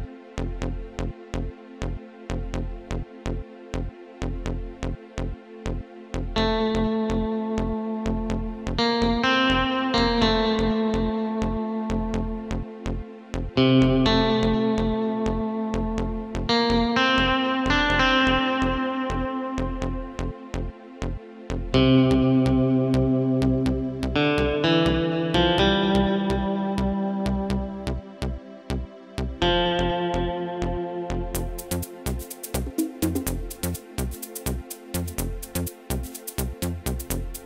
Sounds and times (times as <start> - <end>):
Guitar: 6.3 - 37.4.